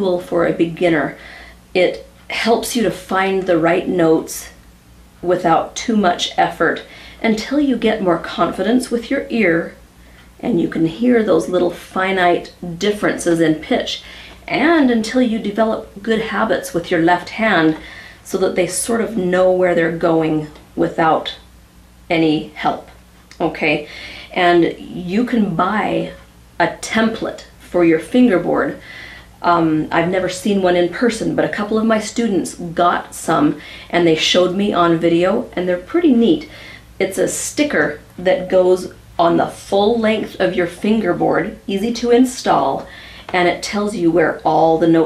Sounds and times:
Speech: 0:00.0 - 0:01.2, 0:01.8 - 0:04.6, 0:05.2 - 0:09.8, 0:10.4 - 0:21.5, 0:22.1 - 0:28.8, 0:29.4 - 0:45.0.

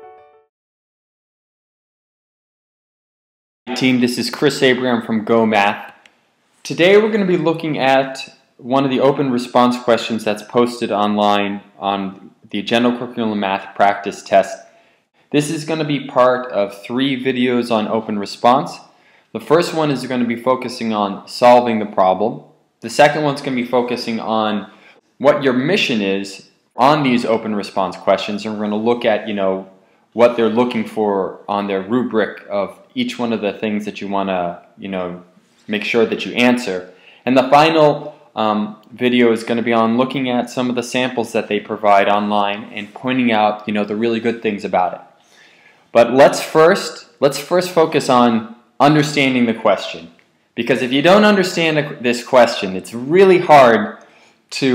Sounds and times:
Speech: 0:03.7 - 0:06.0, 0:06.6 - 0:14.7, 0:15.3 - 0:45.1, 0:45.9 - 0:54.7.

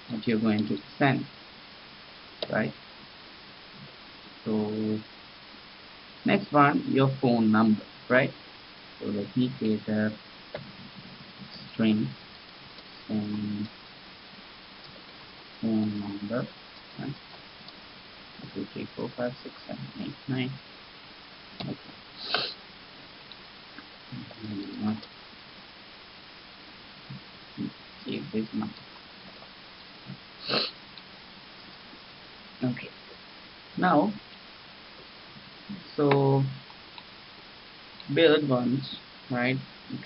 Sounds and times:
Inside, small room: 0:00.0 - 0:40.0
Speech: 0:00.1 - 0:01.3, 0:02.5 - 0:02.8, 0:04.4 - 0:05.1, 0:06.3 - 0:08.4, 0:09.0 - 0:10.2, 0:11.5 - 0:12.2, 0:13.1 - 0:13.7, 0:15.6 - 0:17.2, 0:18.5 - 0:20.6, 0:24.1 - 0:25.0, 0:27.6 - 0:28.8, 0:32.6 - 0:33.0, 0:33.8 - 0:34.2, 0:35.7 - 0:36.6, 0:38.1 - 0:40.0.

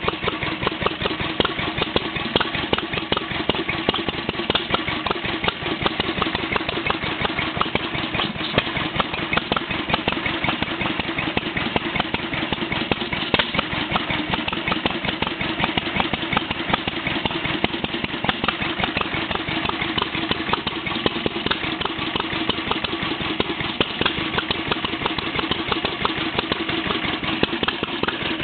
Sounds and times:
Idling: 0:00.0 - 0:28.4.

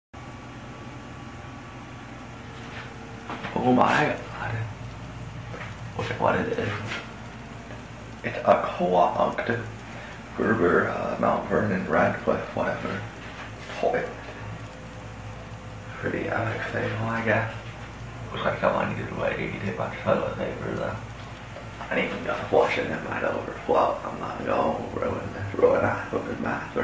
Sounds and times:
Inside, small room: 0:00.2 - 0:26.8
Speech: 0:03.4 - 0:04.8, 0:06.0 - 0:07.1, 0:08.2 - 0:09.8, 0:10.4 - 0:14.3, 0:15.9 - 0:17.7, 0:18.3 - 0:21.1, 0:21.8 - 0:26.8.

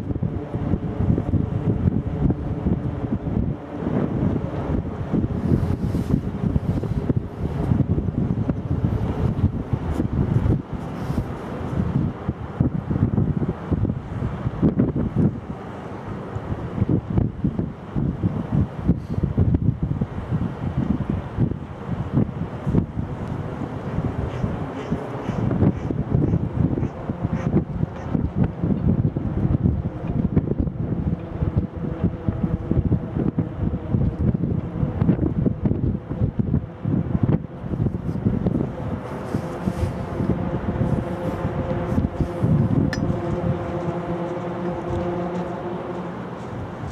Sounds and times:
Ship: 0:00.0 - 0:46.9
Wind noise (microphone): 0:00.0 - 0:46.9.

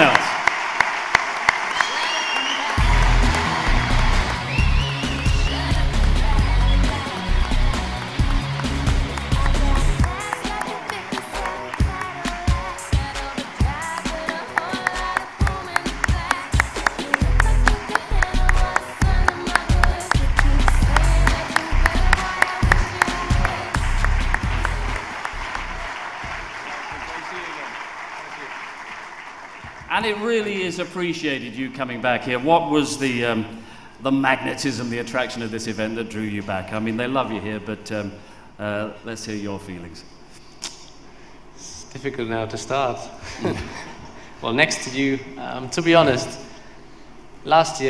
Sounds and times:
Male speech, man speaking: 0:00.0 - 0:00.3, 0:26.9 - 0:28.6, 0:29.9 - 0:40.1, 0:41.6 - 0:43.2, 0:44.4 - 0:46.5, 0:47.4 - 0:47.9
Music: 0:02.4 - 0:26.6.

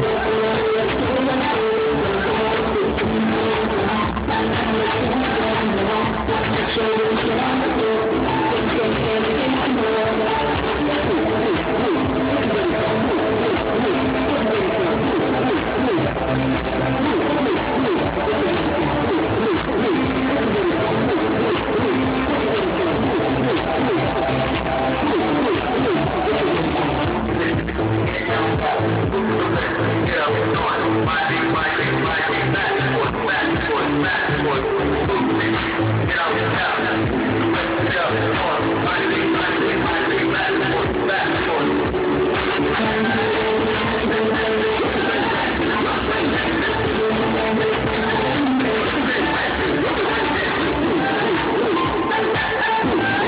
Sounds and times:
Music: 0:00.0 - 0:53.2.

